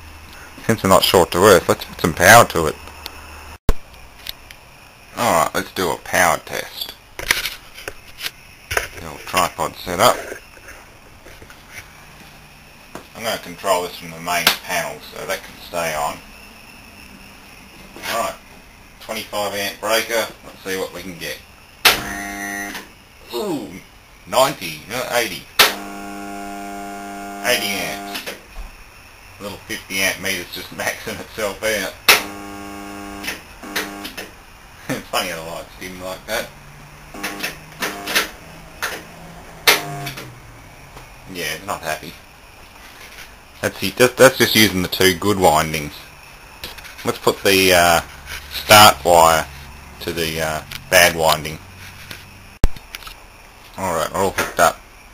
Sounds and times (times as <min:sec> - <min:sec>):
Speech: 0:00.6 - 0:02.8, 0:05.2 - 0:07.0, 0:09.0 - 0:10.3, 0:13.2 - 0:16.2, 0:18.0 - 0:18.4, 0:19.0 - 0:21.4, 0:23.3 - 0:25.5, 0:27.4 - 0:28.2, 0:29.4 - 0:32.0, 0:34.9 - 0:36.5, 0:41.3 - 0:42.2, 0:43.6 - 0:46.1, 0:47.0 - 0:48.0, 0:48.6 - 0:51.6, 0:53.8 - 0:54.8.